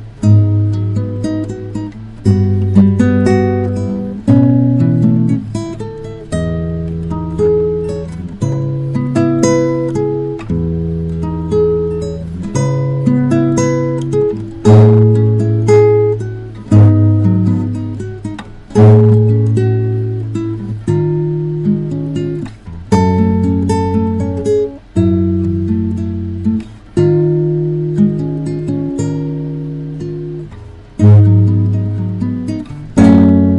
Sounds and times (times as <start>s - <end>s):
Acoustic guitar: 0.0s - 33.5s
Strum: 0.0s - 33.5s.